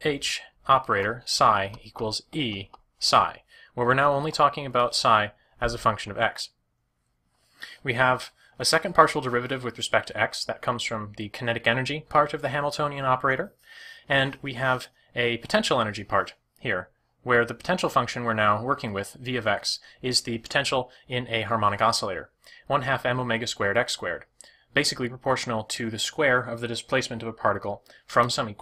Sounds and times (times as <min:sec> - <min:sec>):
Speech: 0:00.0 - 0:06.6, 0:07.6 - 0:28.6.